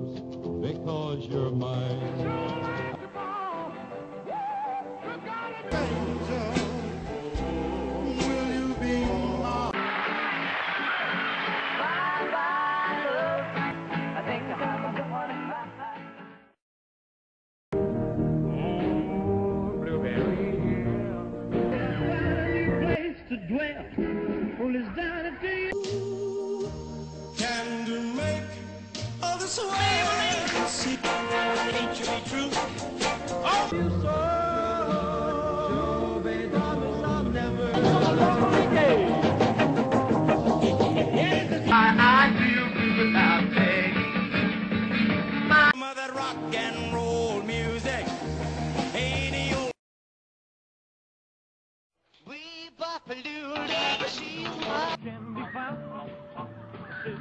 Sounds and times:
Rock and roll: 0.0 - 16.4, 17.8 - 49.8, 53.3 - 57.2.

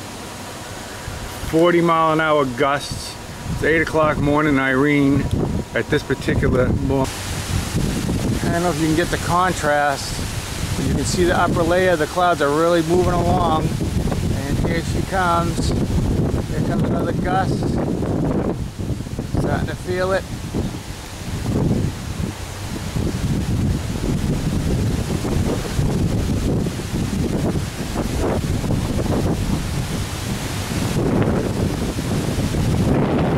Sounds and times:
Wind noise (microphone): 2.8 - 33.3.

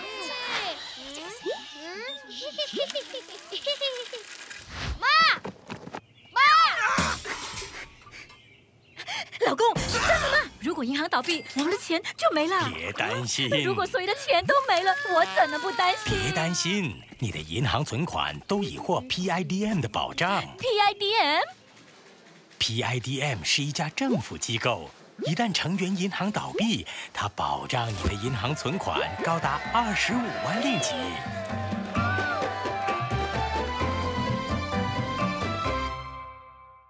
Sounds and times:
Speech: 22.6 - 31.2
Music: 29.6 - 36.8.

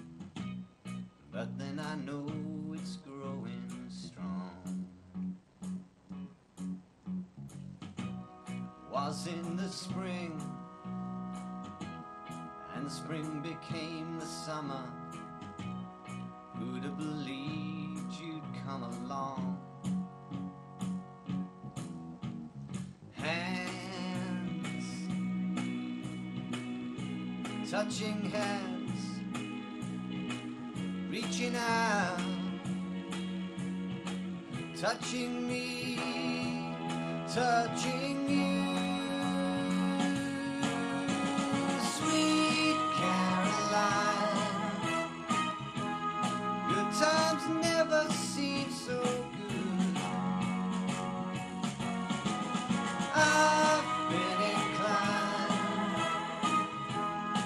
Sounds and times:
Music: 0.0 - 57.4
Male singing: 1.4 - 4.8, 8.9 - 10.6, 12.7 - 15.0, 16.6 - 19.6, 23.2 - 25.1, 27.7 - 29.2, 31.1 - 32.5, 34.8 - 45.0, 46.7 - 50.4, 53.1 - 56.6.

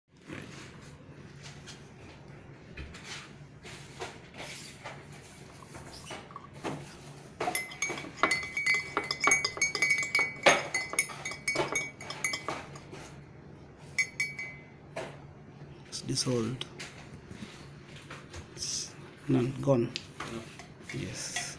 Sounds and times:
Glass: 7.4 - 12.8, 14.0 - 14.6.

